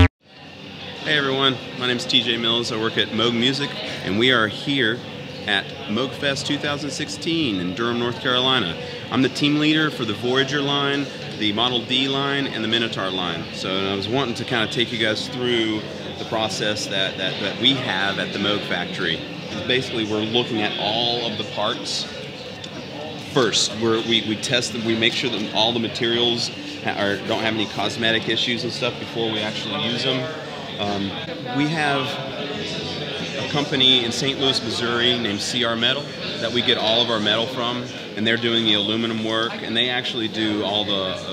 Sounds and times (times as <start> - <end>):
Speech: 0.0 - 41.3.